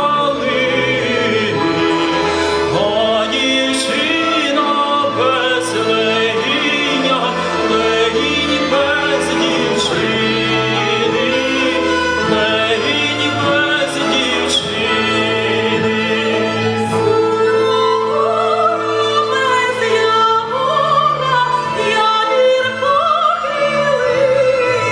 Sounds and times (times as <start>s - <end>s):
Opera: 0.0s - 24.9s.